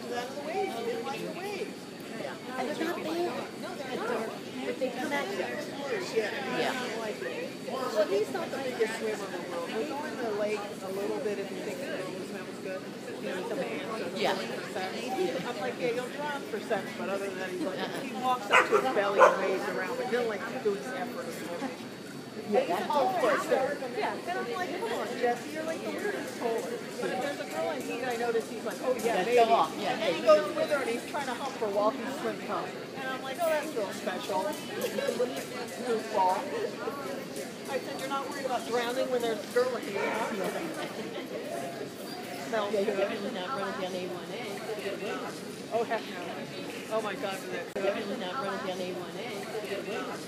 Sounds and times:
Speech: 0.0s - 50.2s.

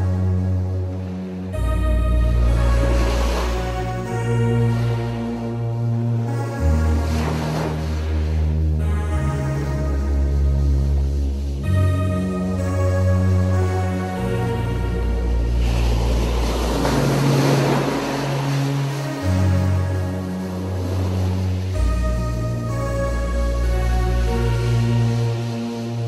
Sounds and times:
Background music: 0.0s - 26.0s.

